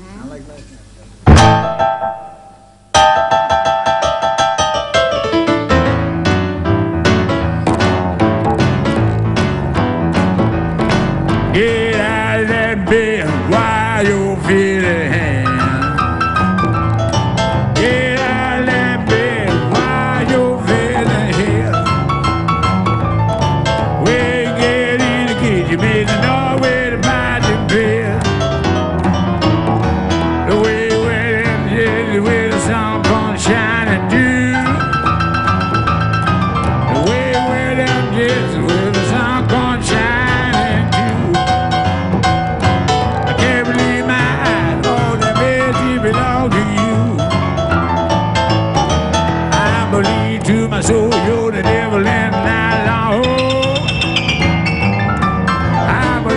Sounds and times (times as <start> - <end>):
Singing: 17.8 - 21.9, 24.0 - 28.3, 49.6 - 53.8.